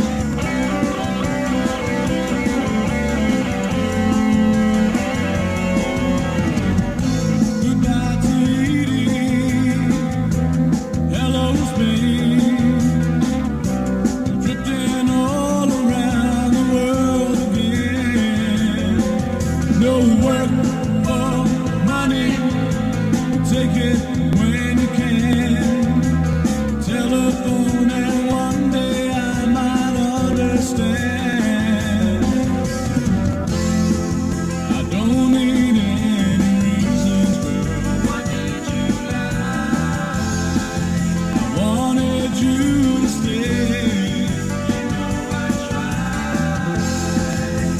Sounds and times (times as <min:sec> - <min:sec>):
Music: 0:00.0 - 0:47.7.